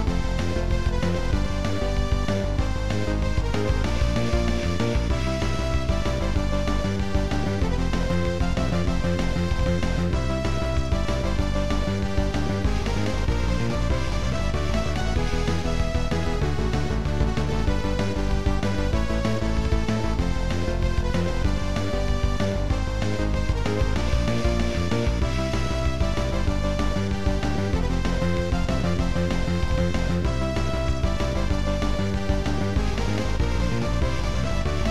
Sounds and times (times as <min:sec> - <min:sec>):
Theme music: 0:00.0 - 0:34.9
Video game music: 0:00.0 - 0:34.9.